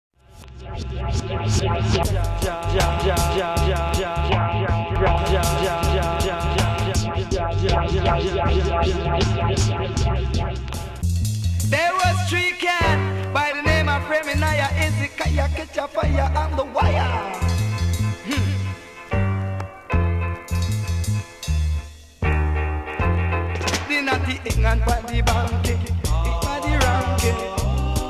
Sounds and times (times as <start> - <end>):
Reggae: 0.3 - 28.0.